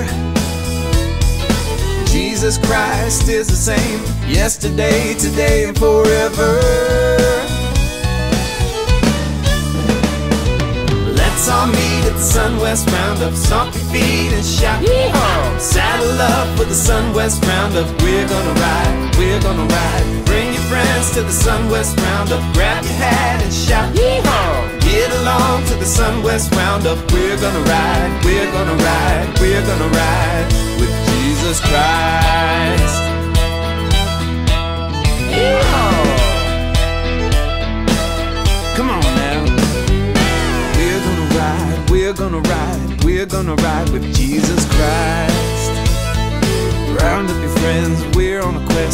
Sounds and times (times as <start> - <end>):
Rhythm and blues: 0.0 - 48.9
Soul music: 0.0 - 48.9.